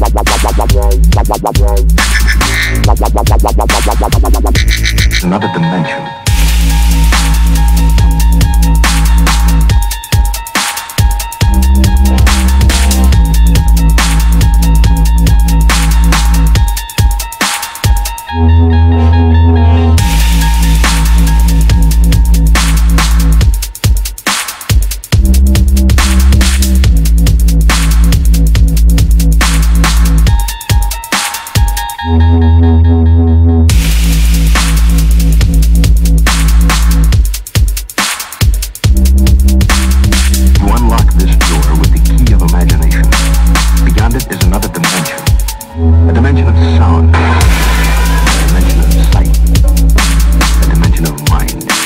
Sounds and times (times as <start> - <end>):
Dubstep: 0.0 - 32.5, 33.7 - 51.8
Drum and bass: 0.0 - 51.8.